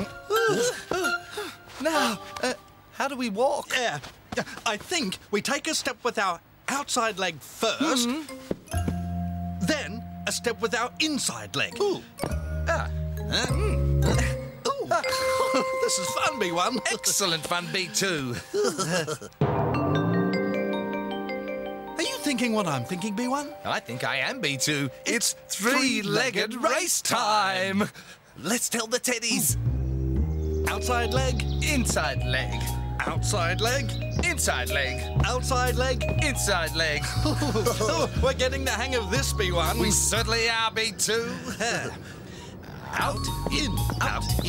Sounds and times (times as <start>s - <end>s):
Marimba, xylophone: 8.3s - 11.0s, 11.7s - 18.6s, 19.4s - 26.2s, 30.7s - 40.3s, 43.1s - 44.4s
Vibraphone: 8.3s - 11.0s, 11.7s - 18.5s, 19.4s - 25.9s, 30.4s - 40.3s, 43.0s - 44.4s.